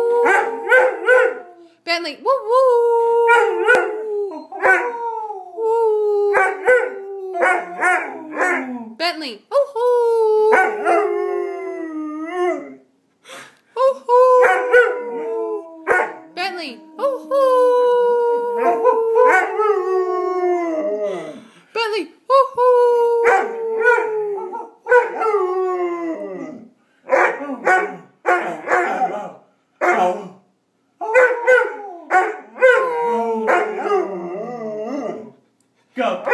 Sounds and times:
Howl: 0:00.0 - 0:01.6, 0:02.6 - 0:08.9, 0:10.1 - 0:12.8, 0:14.1 - 0:21.4, 0:22.9 - 0:26.7, 0:31.0 - 0:35.4.

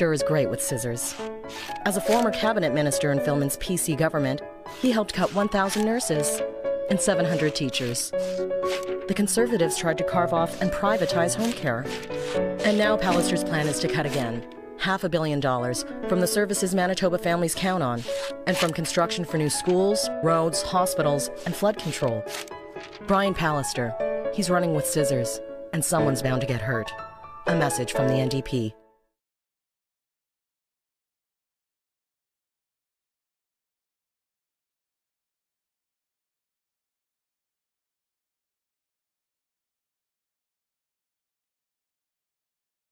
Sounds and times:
Speech: 0:00.0 - 0:01.2, 0:01.9 - 0:08.2, 0:09.1 - 0:12.0, 0:12.6 - 0:22.2, 0:23.1 - 0:28.8
Music: 0:00.0 - 0:29.2.

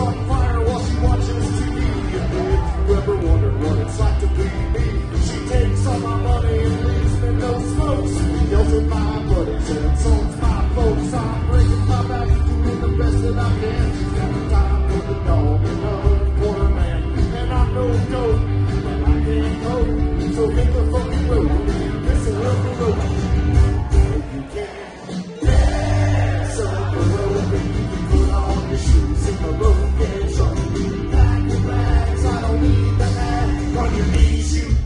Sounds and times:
Crowd: 0:00.0 - 0:34.8.

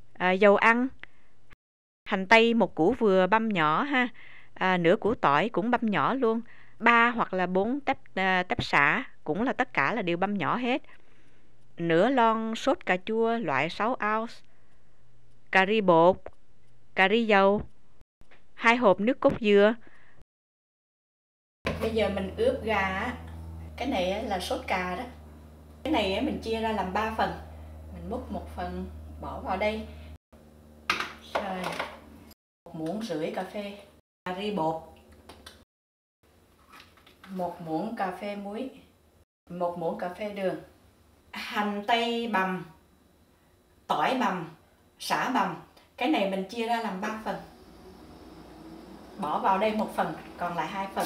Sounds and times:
Speech: 0:00.2 - 0:01.0, 0:02.1 - 0:10.9, 0:11.8 - 0:14.4, 0:15.5 - 0:16.3, 0:17.0 - 0:17.7, 0:18.6 - 0:19.8, 0:21.7 - 0:23.2, 0:23.8 - 0:25.2, 0:25.9 - 0:29.9, 0:31.2 - 0:31.9, 0:32.7 - 0:34.9, 0:37.3 - 0:38.9, 0:39.5 - 0:40.7, 0:41.3 - 0:42.8, 0:43.9 - 0:47.5, 0:49.2 - 0:51.0.

